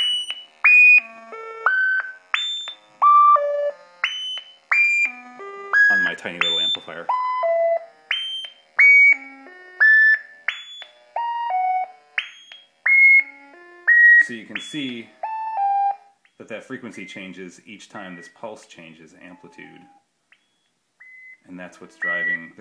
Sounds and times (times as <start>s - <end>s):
Pulse: 0.0s - 17.3s, 19.2s - 22.6s
Speech: 5.9s - 7.1s, 14.2s - 15.1s, 16.4s - 19.9s, 21.4s - 22.6s.